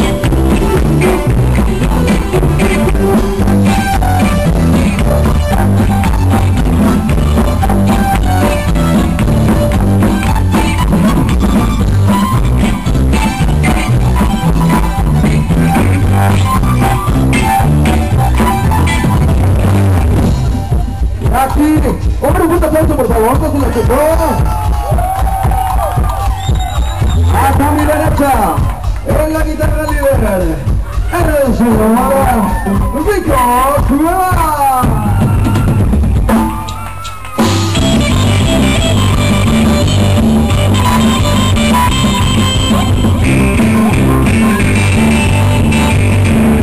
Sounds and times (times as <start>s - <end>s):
Dance music: 0.0s - 46.6s.